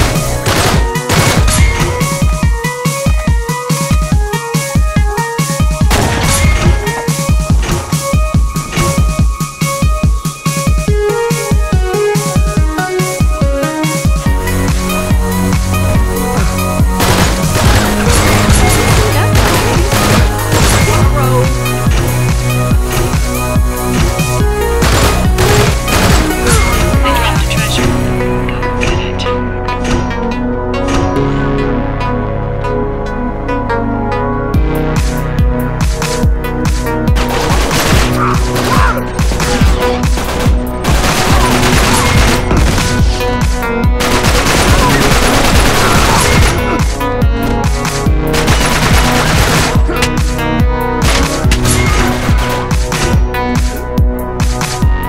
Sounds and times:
Music: 0:00.0 - 0:55.0.

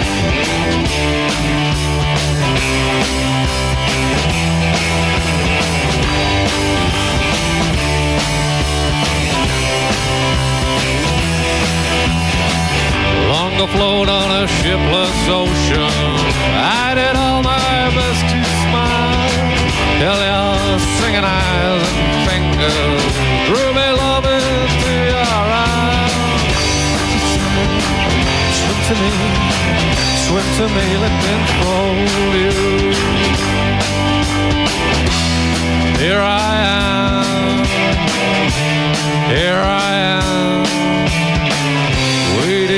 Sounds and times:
Music: 0:00.0 - 0:42.7.

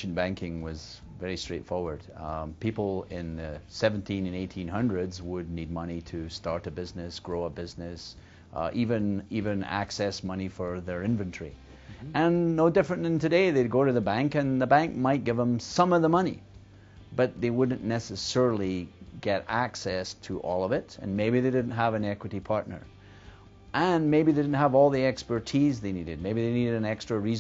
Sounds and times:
Speech: 0:00.0 - 0:16.4, 0:17.2 - 0:22.9, 0:23.8 - 0:27.4.

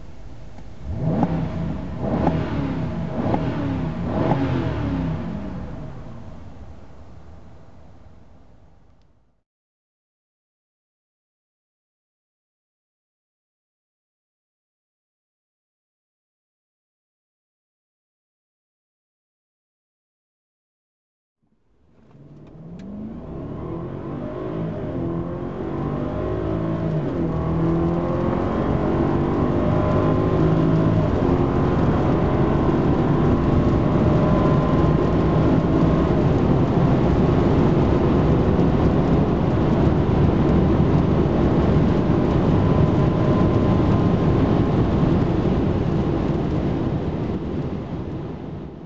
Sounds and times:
Car: 0:00.0 - 0:09.4, 0:21.4 - 0:48.8
Accelerating, revving, vroom: 0:00.9 - 0:05.7, 0:22.2 - 0:44.8.

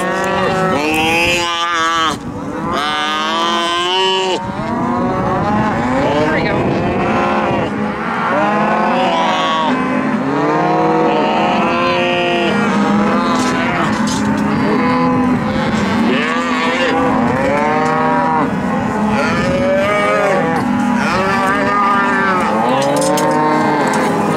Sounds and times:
Speech: 0:06.1 - 0:06.8.

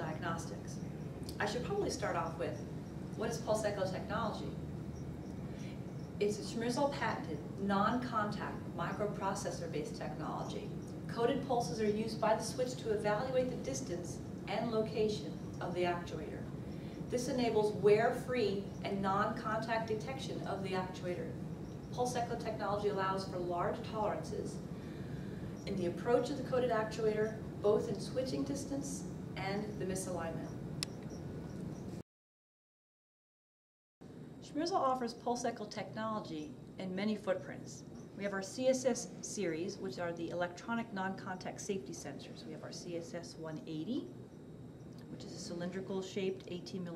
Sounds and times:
Speech: 0:00.0 - 0:02.6, 0:03.2 - 0:04.6, 0:06.2 - 0:16.5, 0:17.1 - 0:21.4, 0:22.0 - 0:24.6, 0:25.7 - 0:30.6, 0:34.4 - 0:44.2, 0:45.0 - 0:46.9.

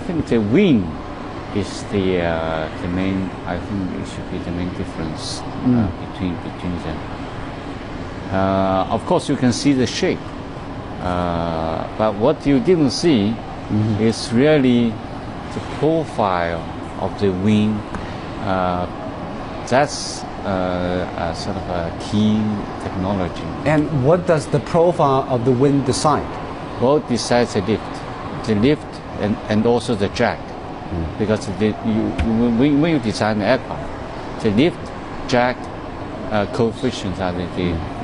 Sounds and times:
Speech: 0:00.0 - 0:01.0, 0:01.6 - 0:07.0, 0:08.3 - 0:10.2, 0:11.0 - 0:15.0, 0:15.6 - 0:18.9, 0:19.7 - 0:33.8, 0:34.4 - 0:35.6, 0:36.3 - 0:38.0.

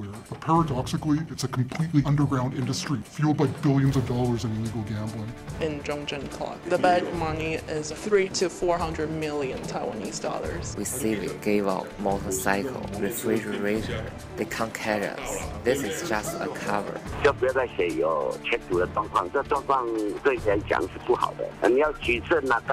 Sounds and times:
Music: 0:00.0 - 0:22.7
Speech: 0:00.0 - 0:22.7.

